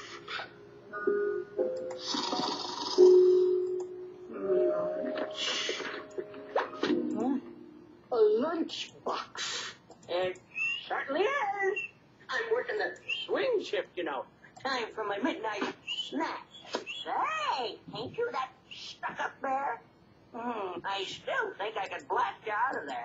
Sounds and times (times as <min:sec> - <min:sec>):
Speech: 0:10.1 - 0:19.8, 0:20.4 - 0:23.0.